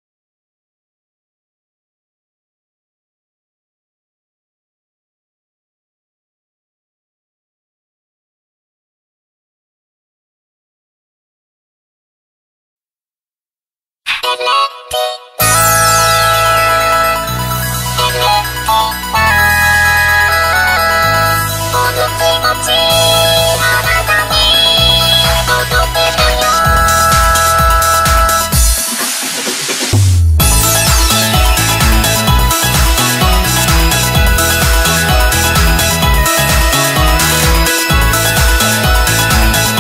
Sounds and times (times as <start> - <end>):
Music: 14.1 - 39.8.